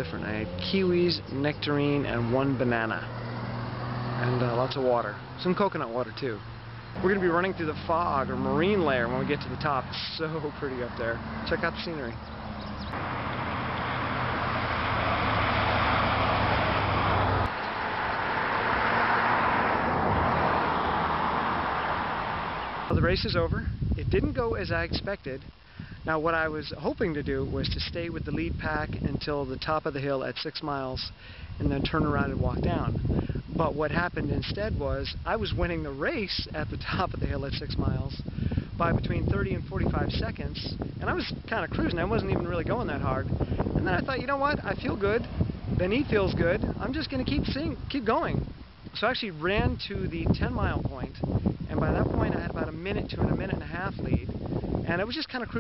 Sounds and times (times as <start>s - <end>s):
Speech: 0.0s - 3.1s, 4.2s - 6.4s, 7.0s - 12.2s, 22.9s - 25.4s, 26.1s - 32.9s, 33.6s - 38.2s, 38.8s - 48.4s, 49.0s - 54.3s, 54.9s - 55.6s.